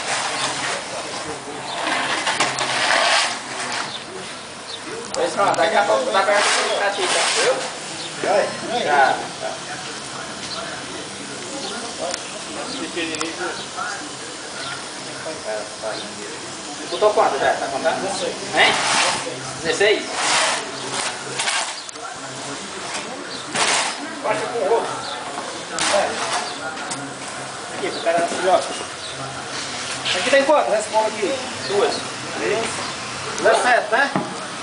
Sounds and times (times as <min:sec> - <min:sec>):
Speech: 0:00.1 - 0:34.6
Snake: 0:13.4 - 0:24.0.